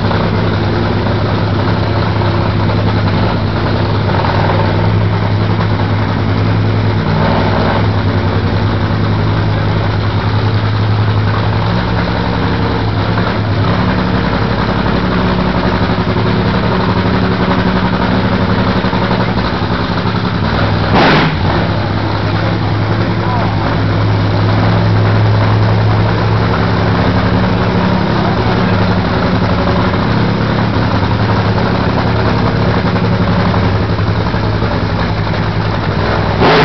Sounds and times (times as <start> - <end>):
Motor vehicle (road): 0.0 - 36.6.